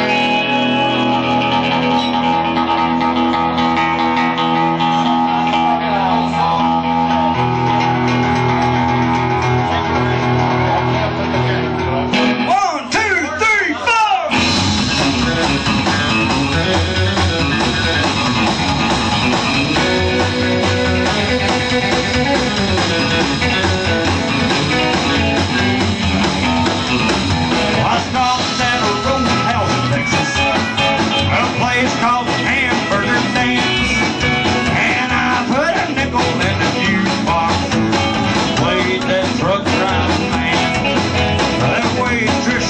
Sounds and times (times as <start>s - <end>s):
Music: 0.0s - 42.7s
Speech: 9.5s - 14.4s, 41.6s - 42.7s.